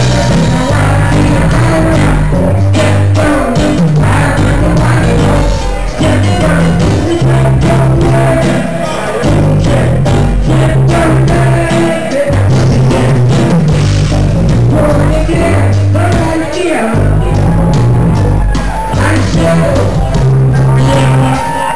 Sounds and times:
Music: 0.0 - 21.7.

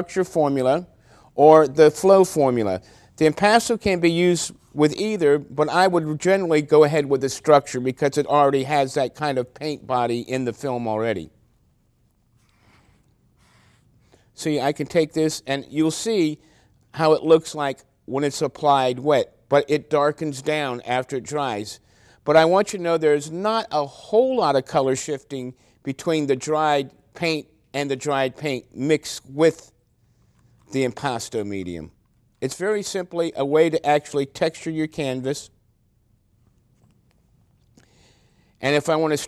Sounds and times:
Speech: 0.0 - 11.4, 14.4 - 29.8, 30.7 - 35.6, 38.6 - 39.2.

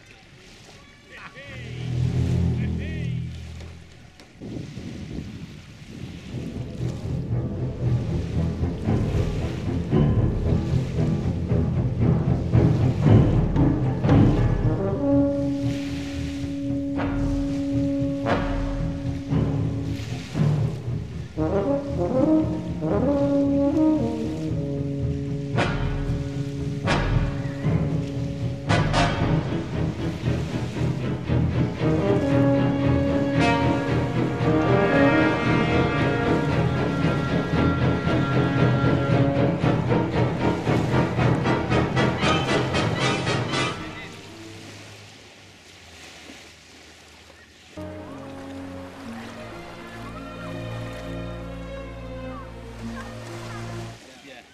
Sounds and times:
Timpani: 6.3 - 44.5
Trombone: 14.1 - 20.4, 21.3 - 29.8, 31.8 - 40.0, 40.8 - 44.2.

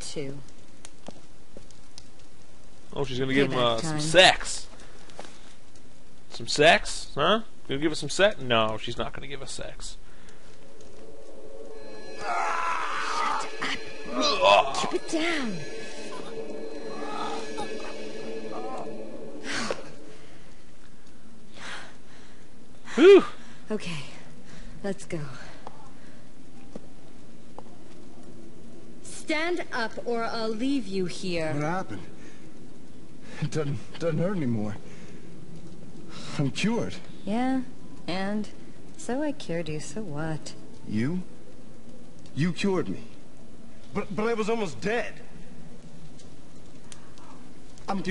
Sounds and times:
Speech: 3.0 - 4.3.

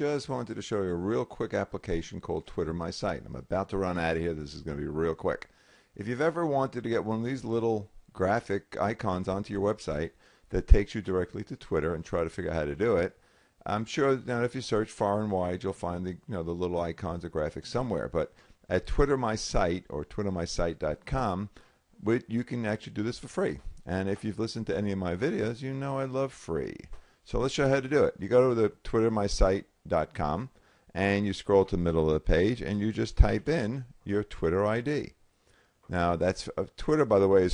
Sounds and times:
Speech: 0.0 - 35.2, 35.9 - 37.5.

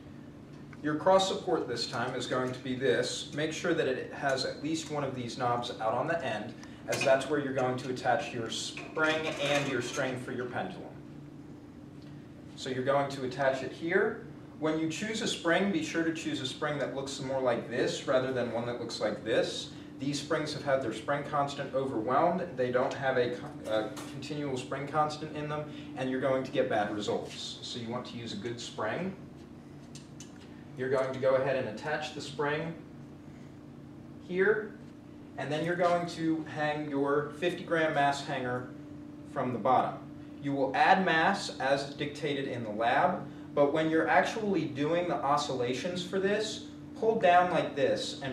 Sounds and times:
Speech: 0.8 - 11.0, 12.6 - 29.2, 30.8 - 32.9, 34.2 - 34.8, 35.4 - 38.7, 39.3 - 48.3.

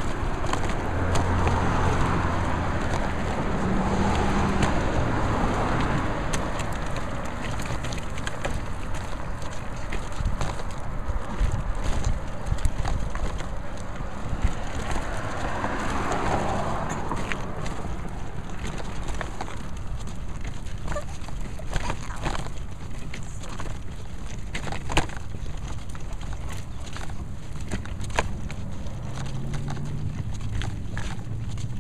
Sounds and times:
Walk, footsteps: 0.0 - 31.8.

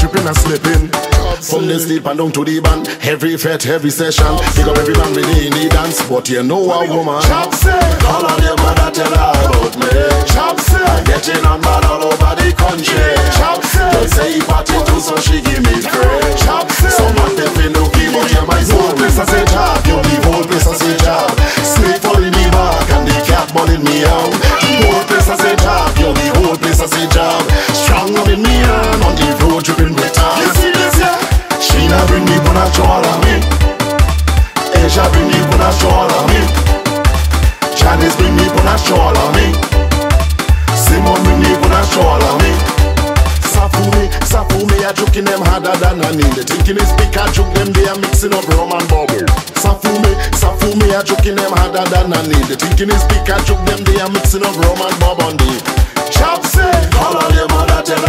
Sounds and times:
Music: 0.0 - 58.0.

